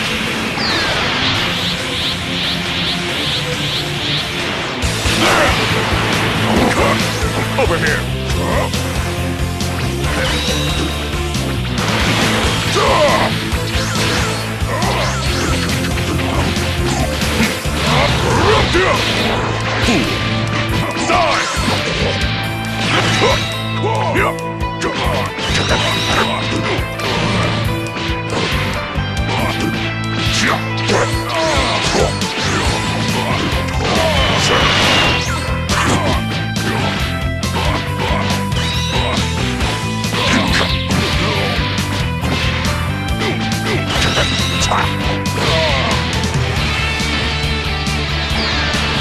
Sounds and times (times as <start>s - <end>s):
Music: 0.0s - 49.0s.